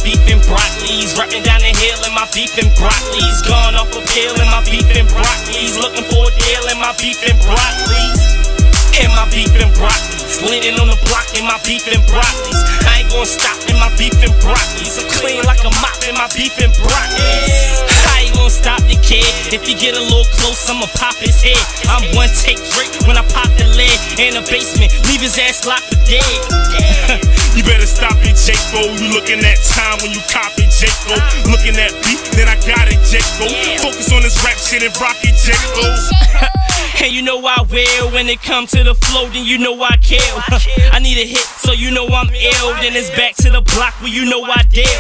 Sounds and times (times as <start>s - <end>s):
Pop music: 0.0s - 45.0s.